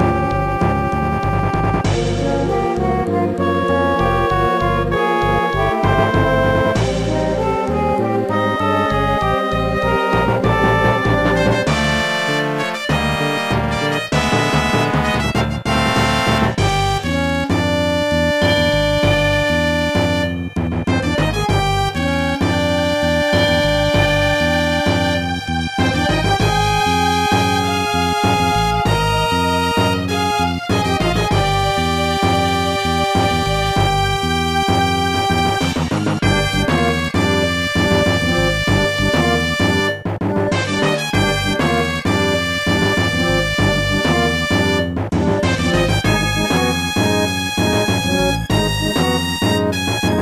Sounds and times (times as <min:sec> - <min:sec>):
Tender music: 0:00.0 - 0:50.2.